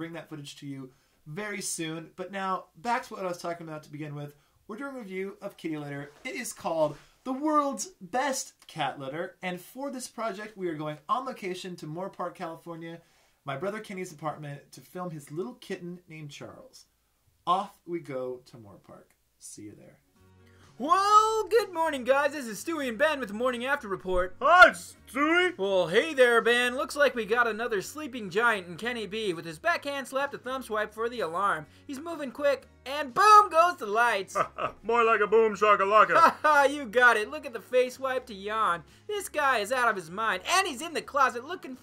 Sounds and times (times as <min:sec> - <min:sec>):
Speech: 0:00.0 - 0:16.9, 0:17.5 - 0:20.0, 0:20.8 - 0:41.8
Music: 0:18.0 - 0:41.8.